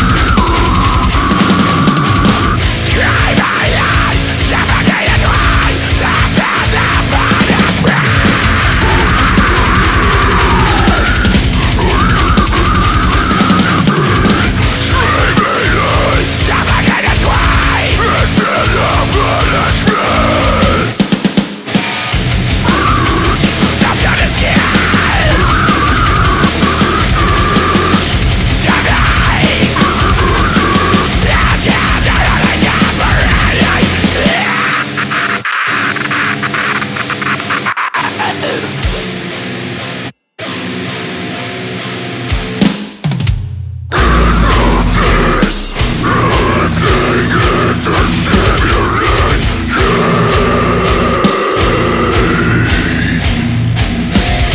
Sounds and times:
Angry music: 0.0 - 54.5.

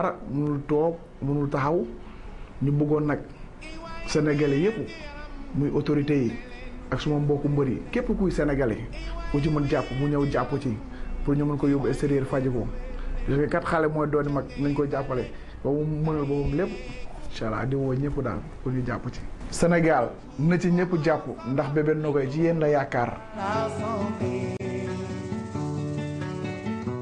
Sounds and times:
Speech: 0.0 - 2.0, 2.6 - 3.3, 4.0 - 5.0, 5.6 - 23.3.

